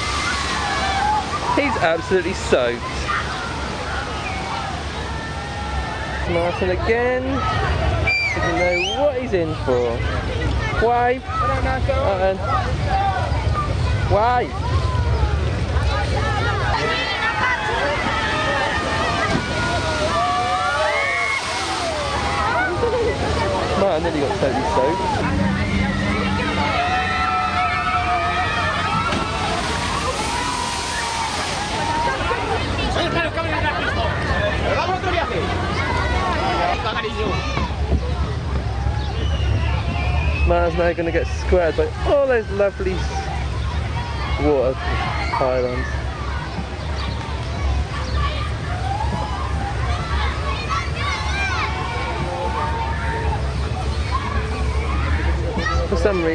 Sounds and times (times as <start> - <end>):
Water: 0.0 - 56.3.